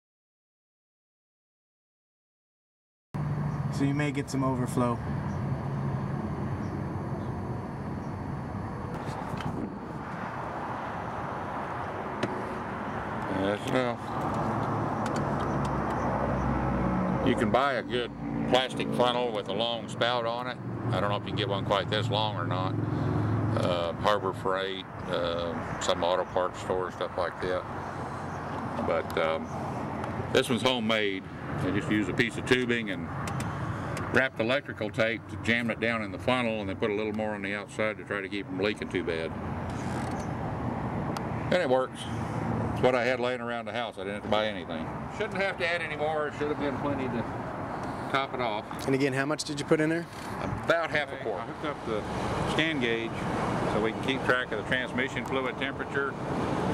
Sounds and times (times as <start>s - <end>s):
Speech: 3.7s - 5.0s, 13.3s - 14.0s, 17.3s - 22.7s, 23.6s - 27.6s, 28.8s - 29.5s, 30.4s - 33.1s, 34.1s - 39.3s, 41.5s - 42.1s, 42.8s - 47.3s, 48.2s - 56.2s.